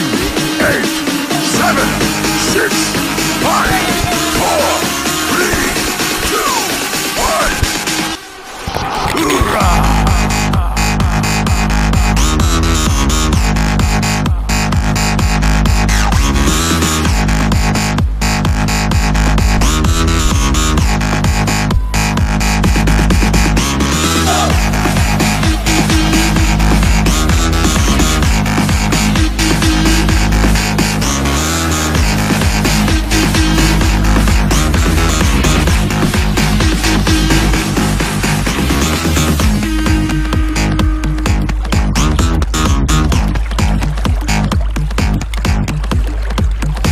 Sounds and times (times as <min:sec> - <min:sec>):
Music: 0:00.0 - 0:46.9.